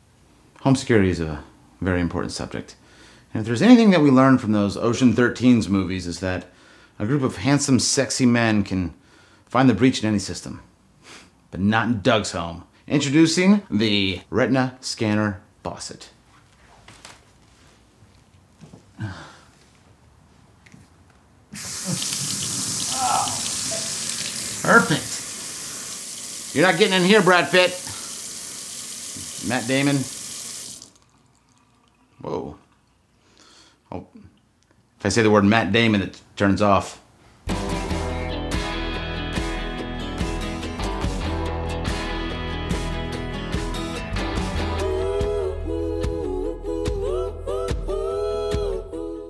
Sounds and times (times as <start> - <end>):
Speech: 0.6 - 10.7, 11.5 - 16.2, 24.6 - 25.2, 26.6 - 28.0, 29.4 - 30.1, 32.2 - 32.6, 33.9 - 34.3, 35.0 - 37.0
Water tap, faucet: 21.6 - 32.2
Music: 37.5 - 49.3.